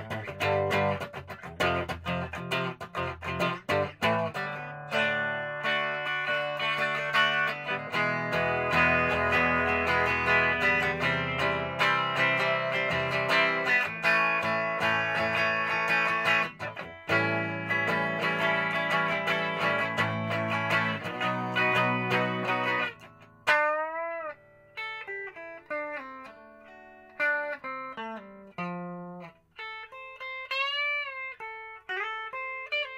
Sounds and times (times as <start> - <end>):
Strum: 0.0 - 32.9.